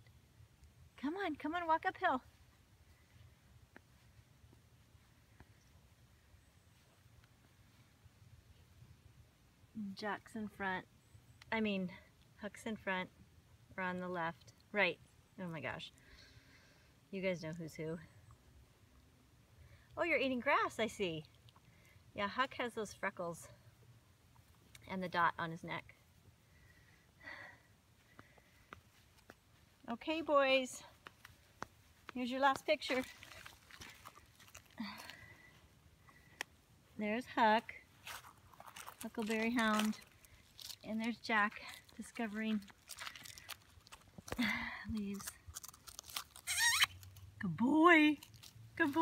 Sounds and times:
Outside, urban or manmade: 0.0s - 49.0s
Speech: 1.0s - 2.3s, 9.8s - 10.9s, 13.8s - 15.9s, 17.1s - 18.1s, 20.0s - 21.3s, 22.2s - 23.5s, 24.8s - 25.9s, 29.8s - 30.9s, 32.1s - 33.1s, 37.0s - 37.8s, 39.0s - 40.0s, 40.8s - 42.7s, 47.4s - 48.2s, 48.8s - 49.0s.

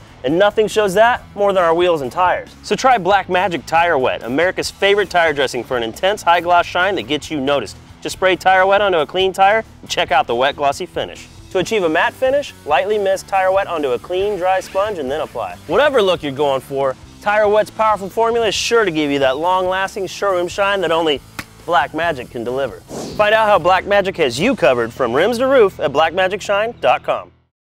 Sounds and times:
Speech: 0.2s - 27.4s.

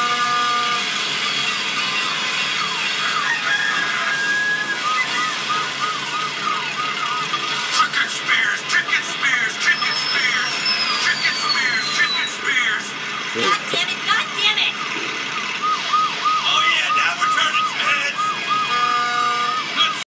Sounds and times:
Speech: 7.7s - 14.8s, 16.4s - 18.2s.

